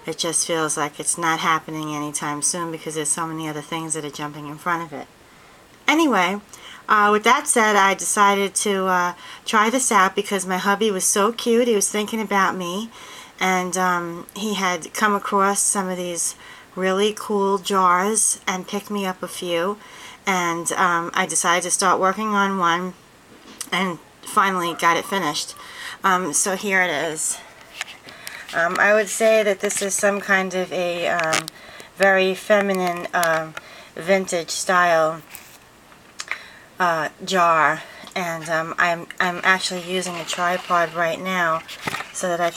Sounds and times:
Speech: 0.0 - 5.1, 5.9 - 23.0, 23.6 - 27.5, 28.5 - 35.3, 36.8 - 42.5.

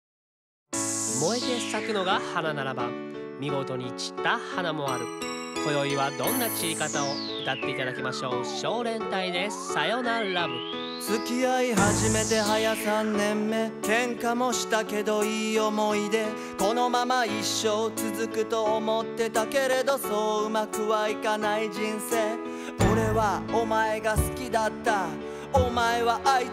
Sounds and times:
Music: 0.7 - 26.5
Speech: 1.2 - 10.6.

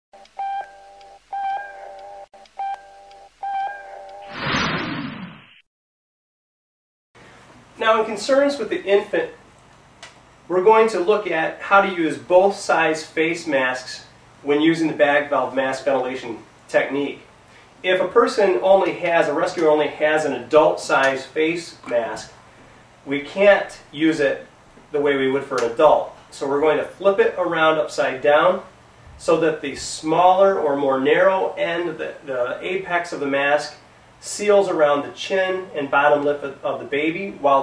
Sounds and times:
Speech: 7.8 - 9.4, 10.5 - 22.4, 23.0 - 37.6.

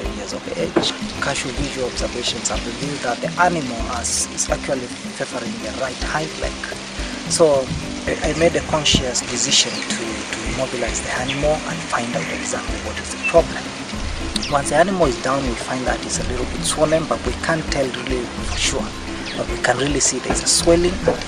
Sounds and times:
Speech: 0.0 - 13.7, 14.4 - 21.2
Music: 0.0 - 21.2.

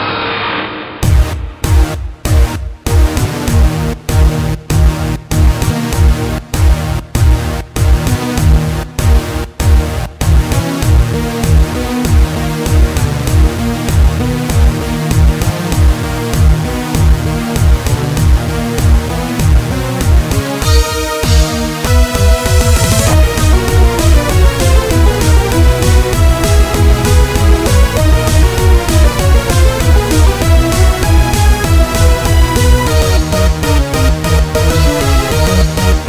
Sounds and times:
Techno: 1.0 - 36.0.

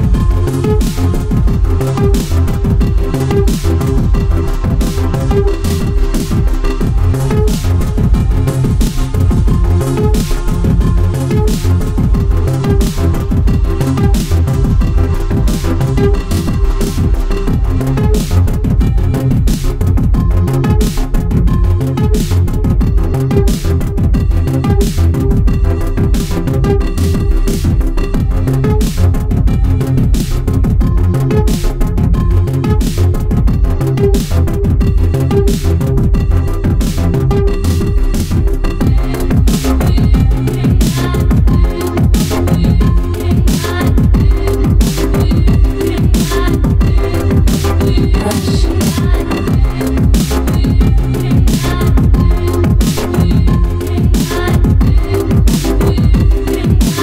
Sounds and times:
Drum and bass: 0.0 - 57.0.

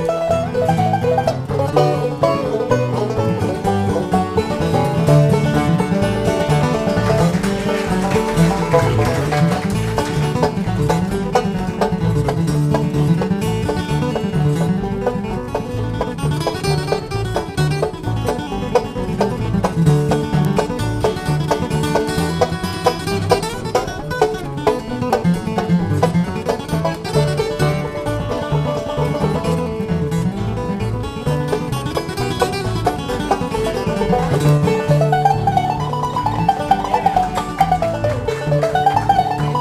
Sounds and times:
Music: 0.0 - 39.6.

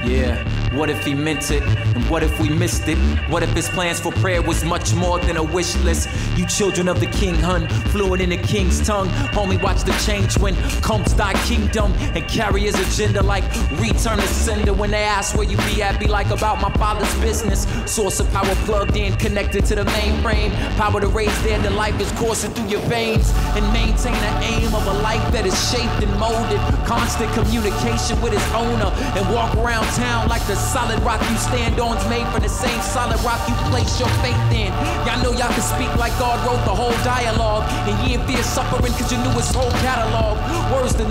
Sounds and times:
Singing: 0.0 - 41.1.

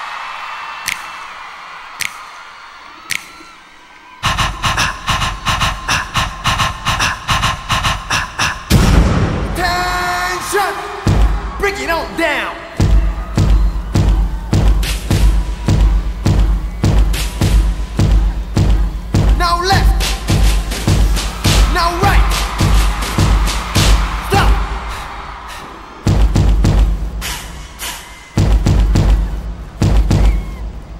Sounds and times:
Music: 4.2 - 9.6, 11.0 - 11.7, 12.7 - 30.9
Speech: 9.6 - 10.9, 11.6 - 12.6, 19.4 - 20.0, 21.7 - 22.2, 24.3 - 24.6.

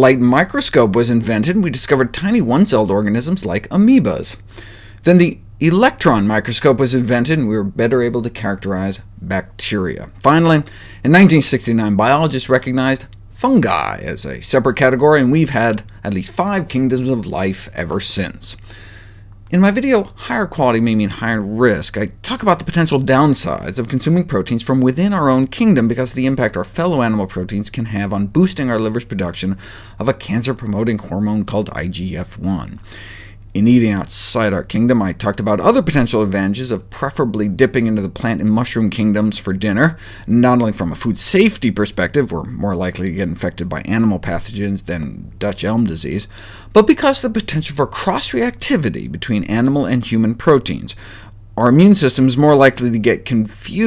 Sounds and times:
Speech: 0.0 - 4.4, 5.0 - 18.6, 19.5 - 32.8, 33.6 - 51.0, 51.6 - 53.8.

